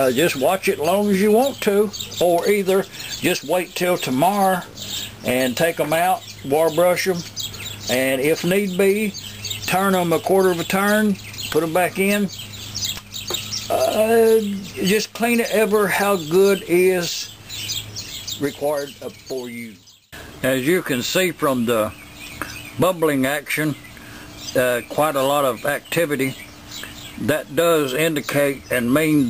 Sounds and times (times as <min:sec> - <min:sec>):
Chirp, tweet: 0:00.0 - 0:29.2.